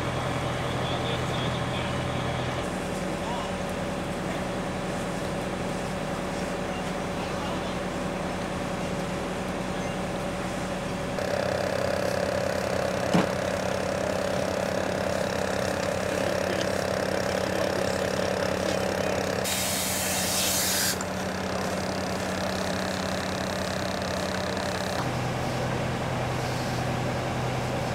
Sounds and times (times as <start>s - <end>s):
Outside, urban or manmade: 0.0s - 27.9s.